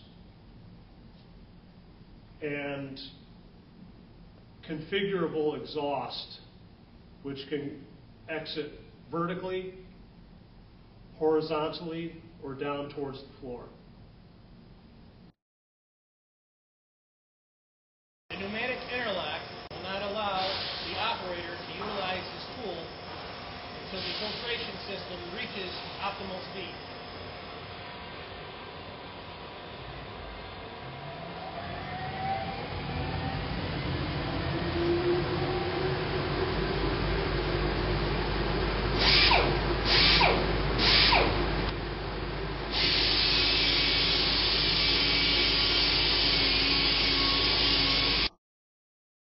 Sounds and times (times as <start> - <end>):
Power tool: 18.3 - 27.6, 39.0 - 41.5, 42.7 - 48.4.